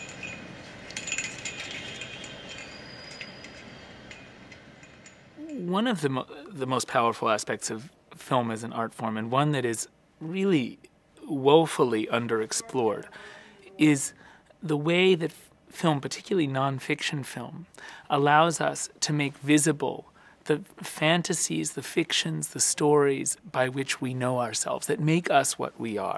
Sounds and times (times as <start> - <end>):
Speech: 5.4 - 26.1.